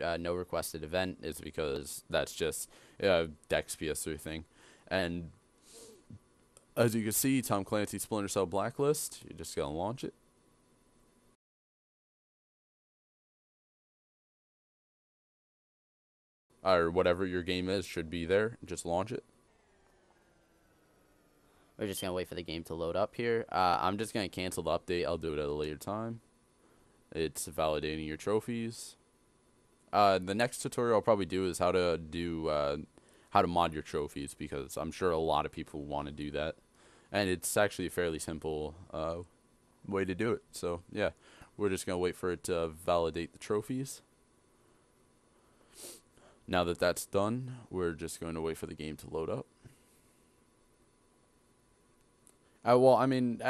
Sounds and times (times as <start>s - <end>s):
Speech: 0.0s - 5.4s, 6.8s - 10.2s, 16.6s - 19.2s, 21.8s - 26.2s, 27.1s - 29.0s, 29.9s - 39.3s, 39.9s - 44.1s, 46.5s - 49.5s, 52.6s - 53.5s.